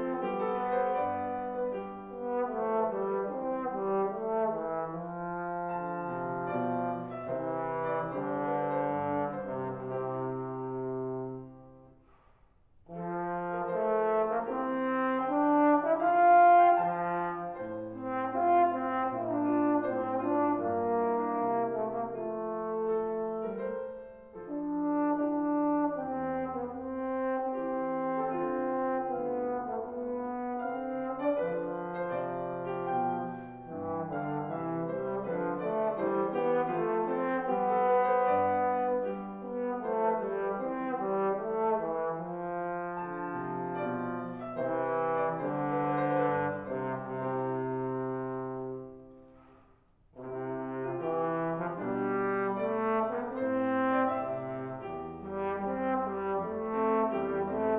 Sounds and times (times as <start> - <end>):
Trombone: 0.0 - 11.8, 12.9 - 49.1, 50.2 - 57.7.